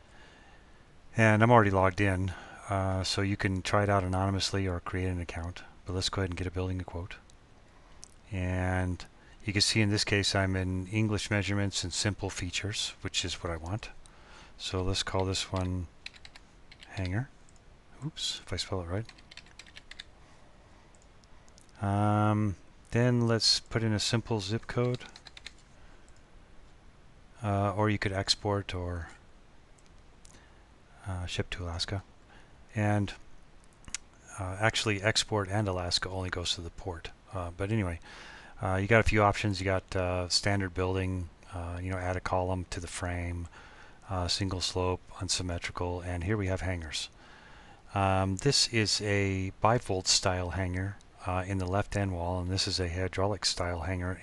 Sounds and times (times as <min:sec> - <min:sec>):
Speech: 0:01.1 - 0:07.2, 0:08.2 - 0:14.0, 0:14.6 - 0:15.9, 0:16.8 - 0:17.3, 0:18.0 - 0:19.2, 0:21.8 - 0:25.2, 0:27.4 - 0:29.2, 0:31.0 - 0:32.1, 0:32.7 - 0:33.2, 0:34.3 - 0:38.0, 0:38.6 - 0:43.5, 0:44.1 - 0:47.1, 0:47.9 - 0:54.2.